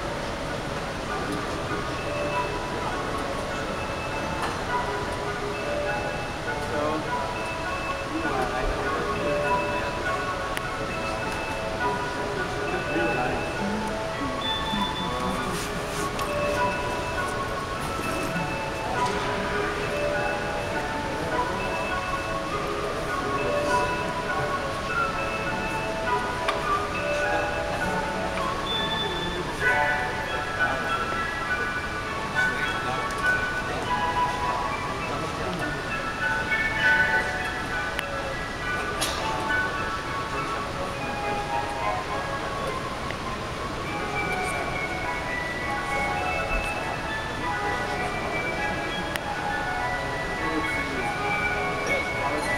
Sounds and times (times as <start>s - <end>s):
Speech: 0.0s - 42.9s, 43.9s - 52.5s
Music: 0.0s - 52.5s.